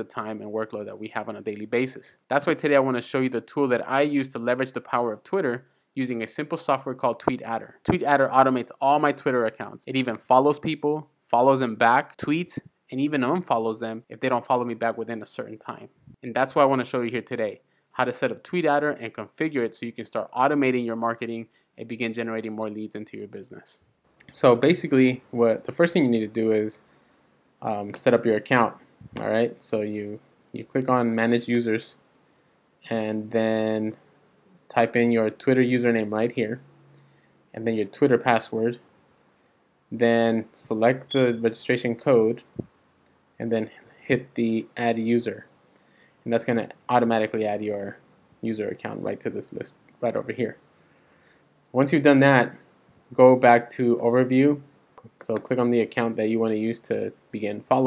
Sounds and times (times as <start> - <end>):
Speech: 0.0 - 26.8, 27.6 - 32.0, 32.8 - 34.1, 34.7 - 36.7, 37.5 - 38.8, 39.9 - 42.7, 43.4 - 45.5, 46.2 - 50.6, 51.7 - 57.8.